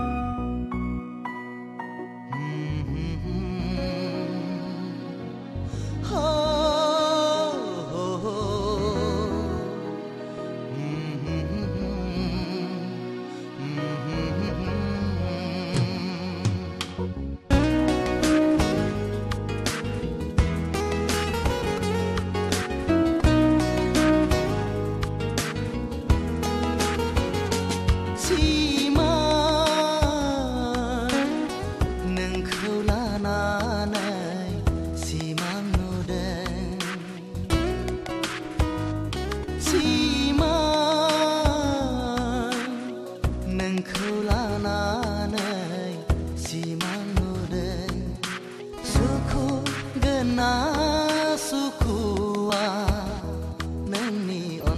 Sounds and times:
Sad music: 0:00.0 - 0:54.7.

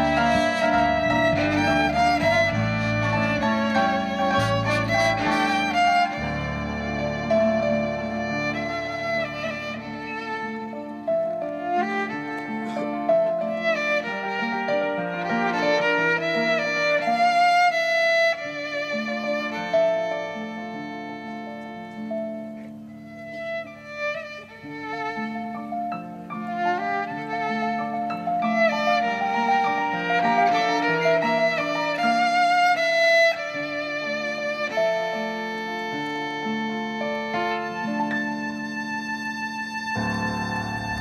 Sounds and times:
Pizzicato: 0:00.0 - 0:13.9.

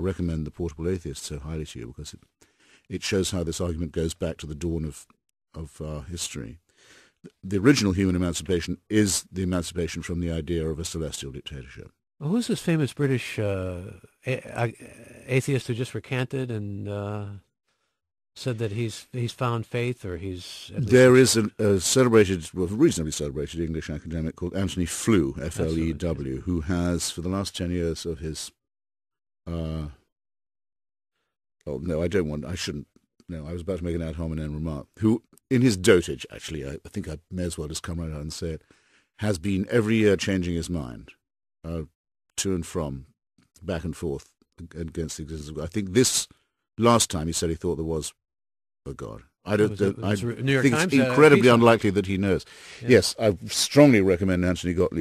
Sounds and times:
Speech: 0:00.0 - 0:02.2, 0:02.9 - 0:06.6, 0:07.3 - 0:17.5, 0:18.4 - 0:28.6, 0:29.5 - 0:30.0, 0:31.7 - 0:38.6, 0:39.2 - 0:48.2, 0:48.9 - 0:55.0.

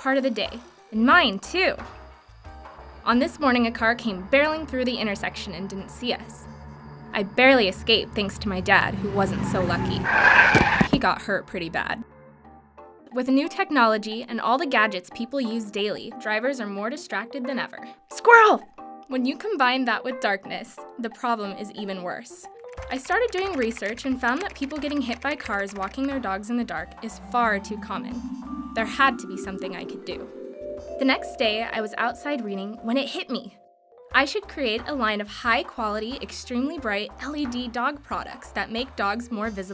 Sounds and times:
Speech: 0:00.0 - 0:01.8, 0:03.1 - 0:06.4, 0:07.2 - 0:10.1, 0:10.9 - 0:12.0, 0:13.2 - 0:28.2, 0:28.8 - 0:30.3, 0:31.0 - 0:33.6, 0:34.2 - 0:39.7.

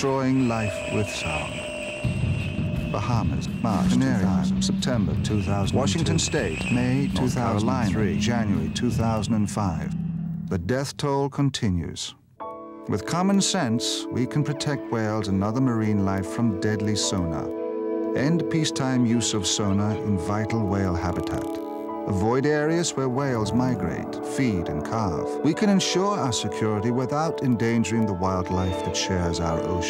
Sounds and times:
Speech: 0:00.0 - 0:01.6, 0:02.9 - 0:12.2, 0:12.9 - 0:17.5, 0:18.2 - 0:29.8
Music: 0:00.0 - 0:11.1, 0:12.1 - 0:29.8.

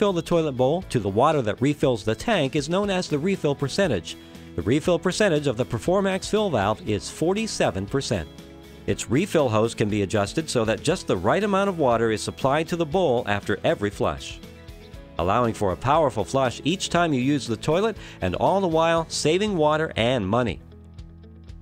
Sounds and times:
Speech: 0:00.0 - 0:08.3, 0:08.9 - 0:14.4, 0:15.2 - 0:20.6
Music: 0:00.0 - 0:21.6.

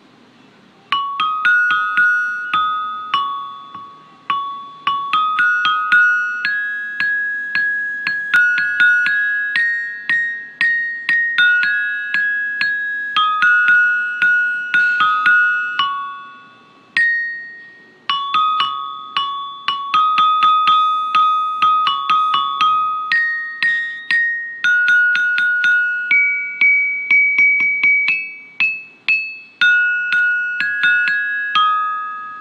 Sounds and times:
Marimba, xylophone: 0:00.9 - 0:32.4.

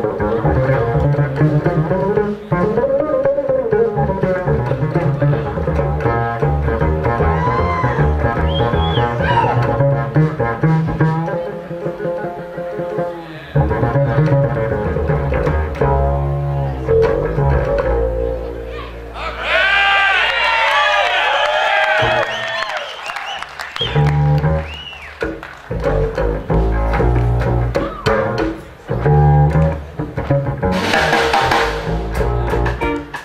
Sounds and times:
Drum kit: 0:23.8 - 0:33.2
Rimshot: 0:30.7 - 0:33.2.

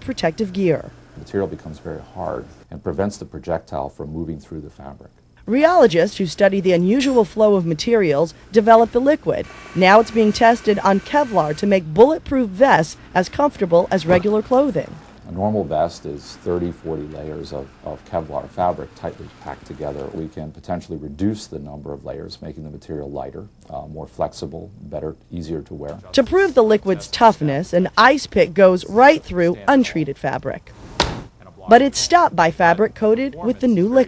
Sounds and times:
Speech: 0:00.0 - 0:30.6, 0:31.4 - 0:34.0.

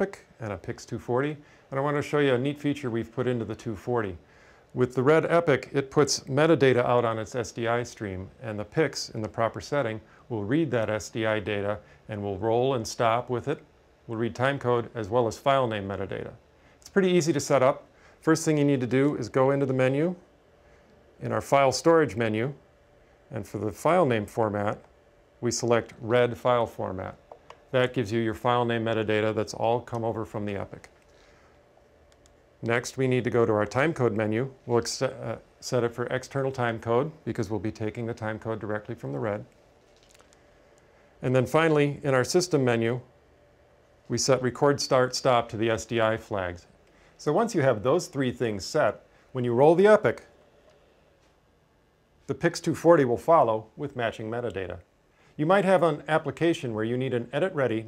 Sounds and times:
Speech: 0:00.0 - 0:20.3, 0:21.2 - 0:22.6, 0:23.3 - 0:31.0, 0:32.6 - 0:39.6, 0:41.2 - 0:43.1, 0:44.1 - 0:50.3, 0:52.2 - 0:57.8.

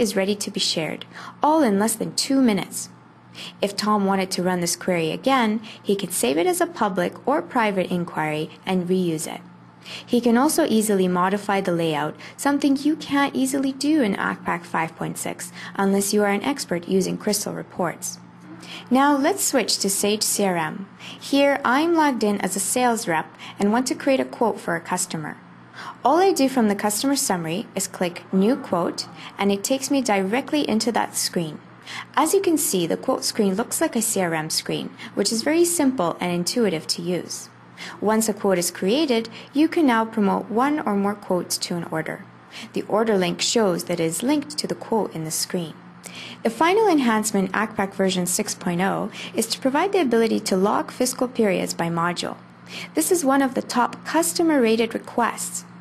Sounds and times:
Speech: 0:00.0 - 0:02.9, 0:03.6 - 0:09.5, 0:10.1 - 0:25.4, 0:26.0 - 0:45.8, 0:46.4 - 0:55.7.

